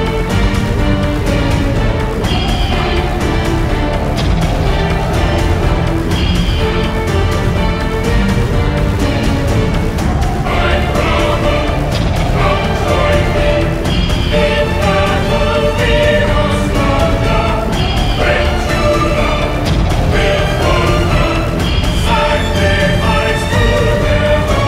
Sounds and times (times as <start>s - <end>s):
Music: 0.0s - 24.6s.